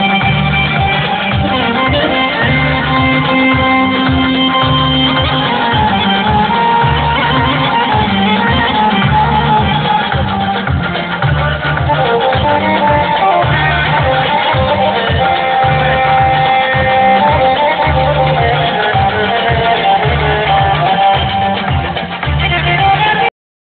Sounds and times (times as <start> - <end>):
Dance music: 0.0 - 23.3.